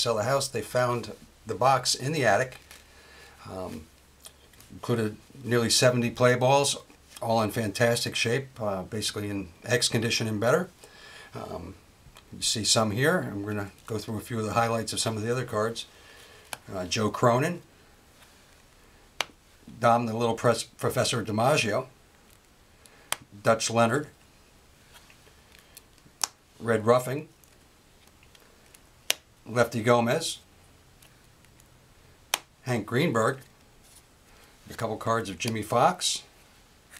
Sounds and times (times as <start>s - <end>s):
Speech: 0.0s - 2.6s, 3.4s - 3.9s, 4.7s - 10.7s, 11.4s - 15.9s, 16.7s - 17.7s, 19.7s - 22.0s, 23.4s - 24.2s, 26.6s - 27.3s, 29.5s - 30.4s, 32.6s - 33.5s, 34.7s - 36.3s.